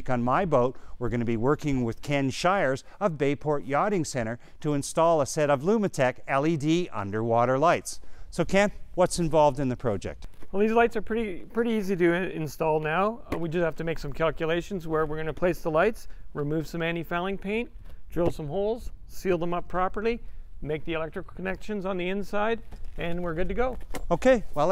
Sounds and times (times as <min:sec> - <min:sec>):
Speech: 0:00.0 - 0:24.7.